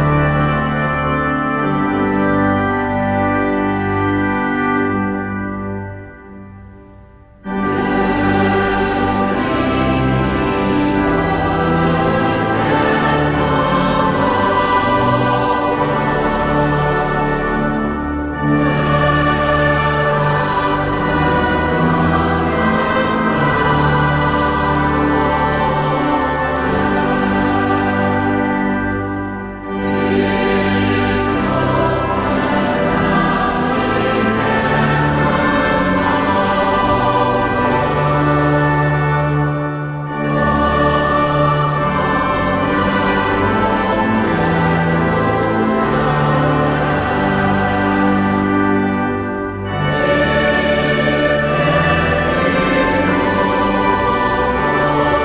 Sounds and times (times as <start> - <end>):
Music: 0.0 - 55.2.